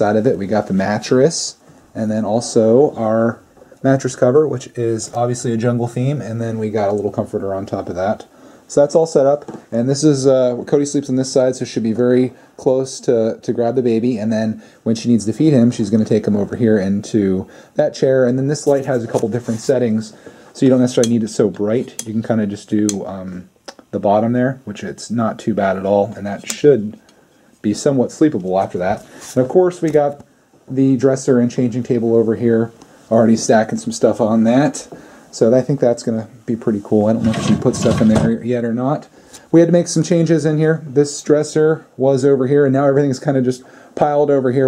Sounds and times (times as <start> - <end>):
Speech: 0.0 - 27.0, 27.6 - 44.6.